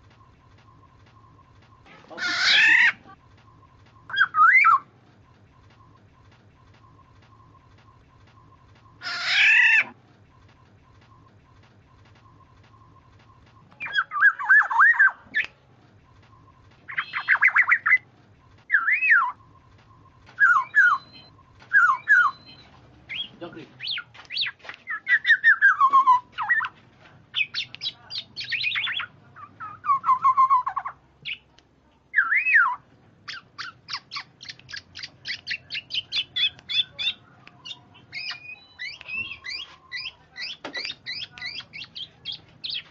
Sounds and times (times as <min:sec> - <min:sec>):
Bird: 0:00.0 - 0:31.5, 0:32.1 - 0:42.9
Speech: 0:23.3 - 0:23.9, 0:27.0 - 0:29.6.